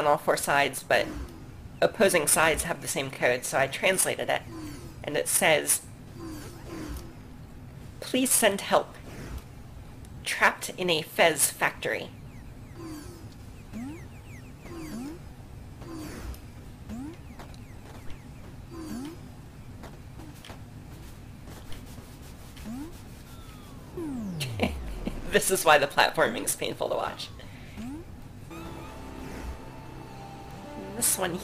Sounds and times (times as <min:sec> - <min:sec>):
Speech: 0:00.0 - 0:01.1, 0:01.8 - 0:04.4, 0:05.1 - 0:05.8, 0:08.0 - 0:09.0, 0:10.3 - 0:12.1, 0:24.4 - 0:27.3, 0:30.8 - 0:31.4.